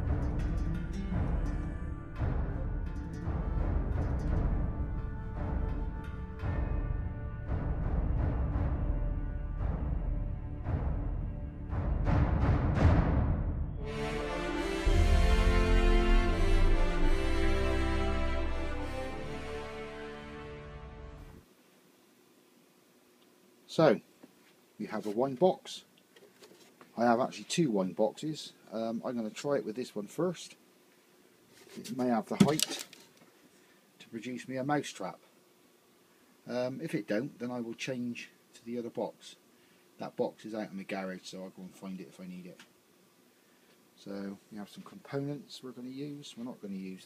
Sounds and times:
Speech: 0:23.7 - 0:24.1, 0:24.8 - 0:25.9, 0:27.0 - 0:30.6, 0:31.7 - 0:32.8, 0:34.0 - 0:35.3, 0:36.5 - 0:39.4, 0:40.0 - 0:42.7, 0:44.0 - 0:47.0.

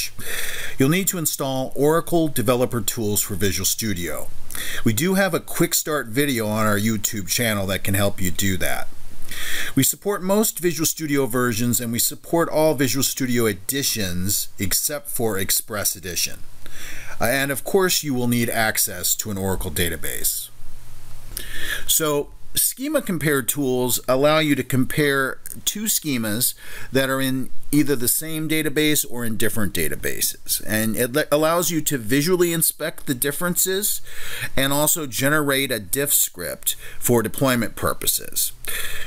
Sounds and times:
Speech: 0:00.0 - 0:00.2, 0:00.8 - 0:08.9, 0:09.7 - 0:16.4, 0:17.2 - 0:20.6, 0:21.9 - 0:38.6.

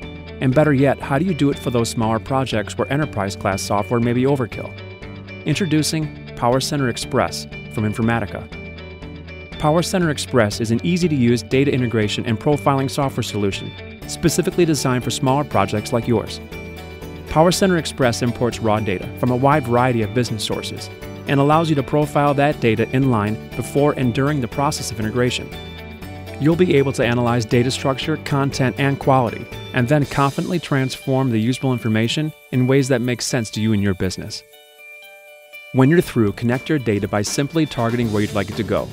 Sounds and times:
Music: 0:00.0 - 0:38.9
Speech: 0:00.4 - 0:04.8, 0:05.5 - 0:08.5, 0:09.6 - 0:16.4, 0:17.3 - 0:25.6, 0:26.4 - 0:34.4, 0:35.8 - 0:38.9.

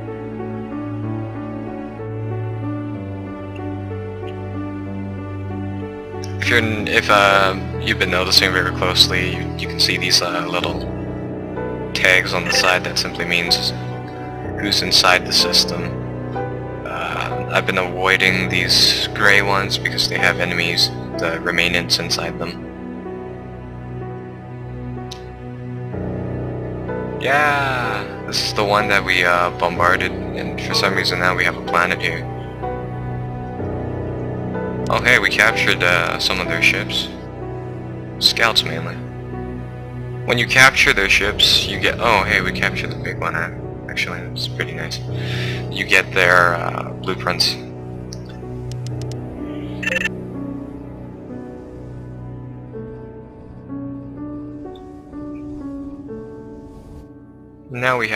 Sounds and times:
Music: 0:00.0 - 0:58.1
Speech: 0:06.3 - 0:10.9, 0:12.0 - 0:13.9, 0:14.5 - 0:16.0, 0:16.9 - 0:22.6, 0:27.2 - 0:32.3, 0:34.9 - 0:37.2, 0:38.2 - 0:39.0, 0:40.3 - 0:47.7, 0:57.7 - 0:58.1.

